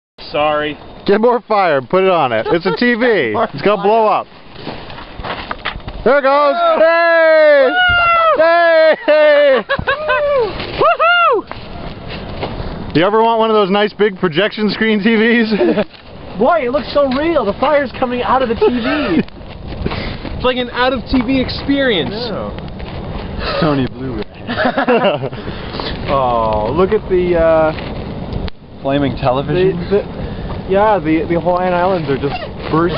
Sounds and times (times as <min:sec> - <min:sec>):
Fire: 0:00.2 - 0:32.9.